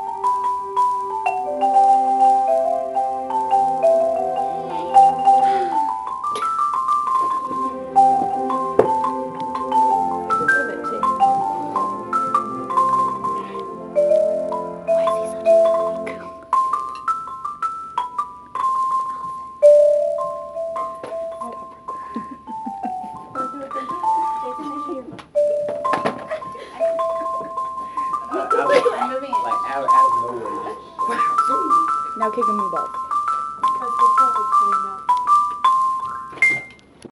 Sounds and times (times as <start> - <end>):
Marimba, xylophone: 0.0 - 37.1.